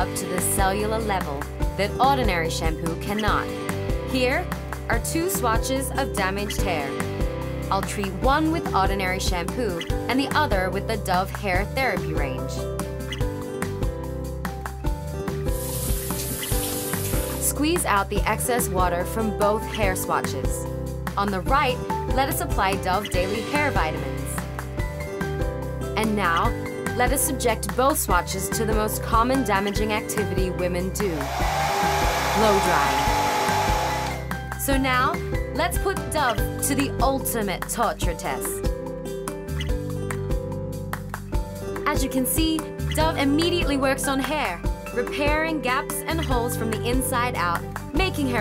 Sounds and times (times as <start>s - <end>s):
Speech: 0.0s - 3.4s, 4.1s - 6.9s, 7.7s - 12.6s, 17.4s - 20.6s, 21.2s - 24.4s, 26.0s - 31.2s, 32.4s - 33.0s, 34.6s - 38.6s, 41.9s - 48.4s
Music: 0.0s - 48.4s.